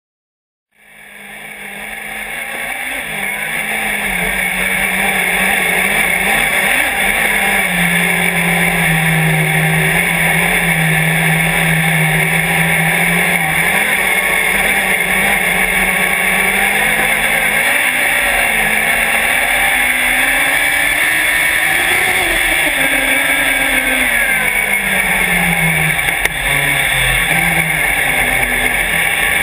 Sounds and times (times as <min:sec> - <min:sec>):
Car: 0:00.8 - 0:29.4.